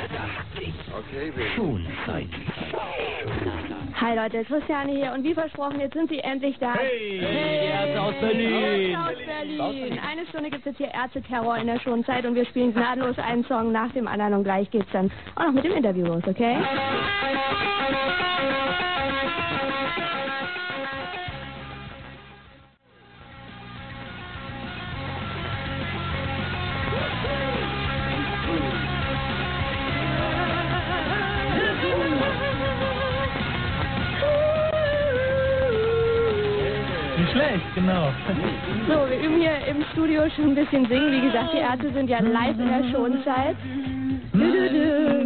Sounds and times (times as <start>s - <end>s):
Music: 4.8s - 14.0s, 14.7s - 45.2s.